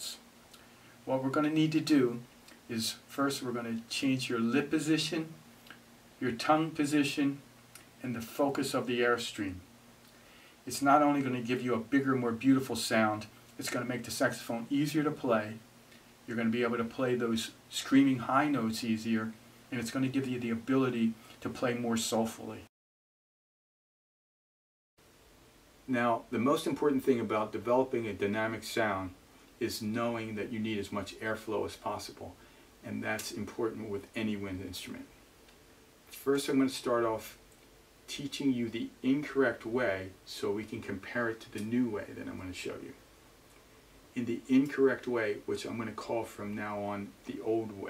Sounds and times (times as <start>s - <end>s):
Speech: 0.0s - 0.2s, 1.0s - 5.4s, 6.2s - 7.4s, 8.0s - 9.7s, 10.6s - 15.6s, 16.3s - 22.7s, 25.9s - 35.2s, 36.1s - 37.4s, 38.1s - 43.0s, 44.1s - 47.8s.